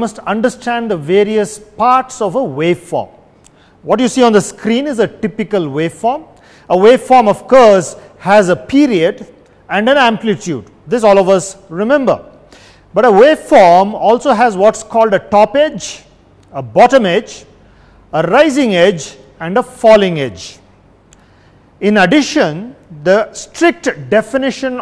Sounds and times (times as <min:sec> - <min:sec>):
Speech: 0:00.0 - 0:03.2, 0:03.8 - 0:12.3, 0:12.9 - 0:17.5, 0:18.1 - 0:20.6, 0:21.8 - 0:24.8.